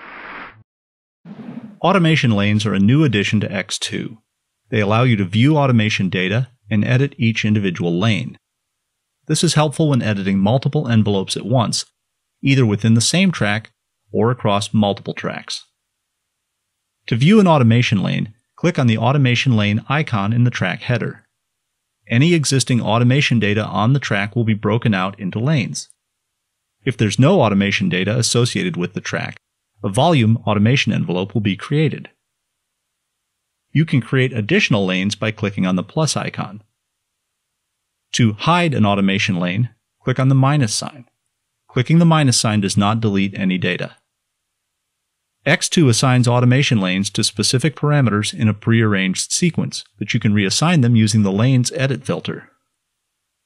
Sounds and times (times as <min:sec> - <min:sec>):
Speech: 0:01.8 - 0:08.4, 0:09.3 - 0:15.8, 0:17.1 - 0:21.3, 0:22.1 - 0:26.0, 0:26.8 - 0:32.2, 0:33.7 - 0:36.7, 0:38.1 - 0:41.1, 0:41.7 - 0:44.1, 0:45.4 - 0:52.6.